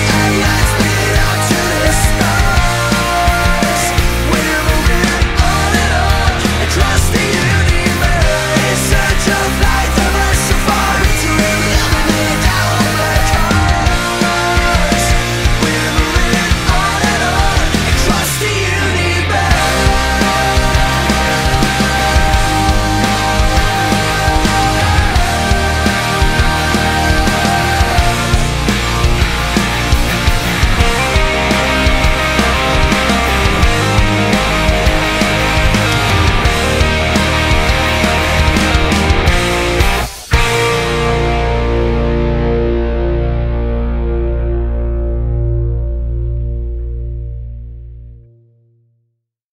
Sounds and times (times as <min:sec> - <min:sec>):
Music: 0:00.0 - 0:49.2.